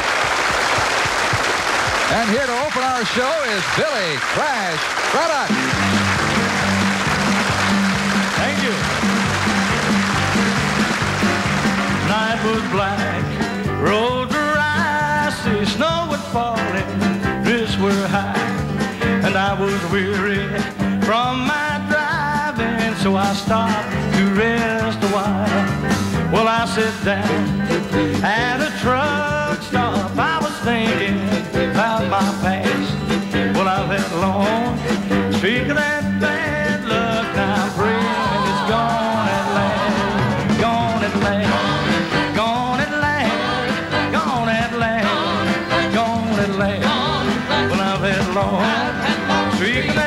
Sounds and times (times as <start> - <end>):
Bluegrass: 5.2 - 50.0.